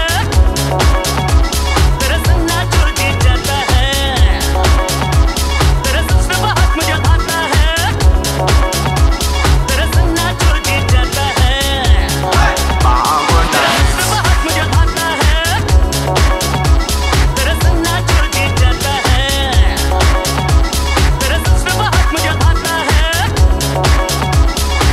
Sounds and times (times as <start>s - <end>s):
Music: 0.0s - 24.9s.